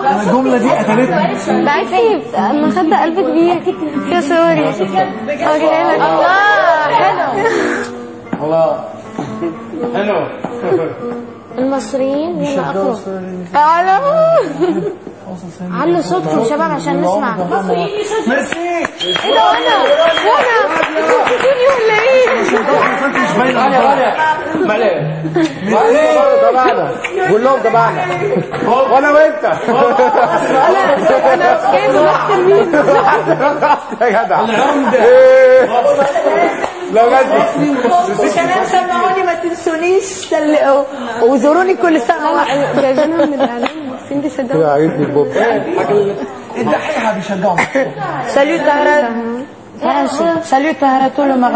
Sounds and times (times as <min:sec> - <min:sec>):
Chatter: 0:00.0 - 0:51.5
Inside, large room or hall: 0:00.0 - 0:51.5.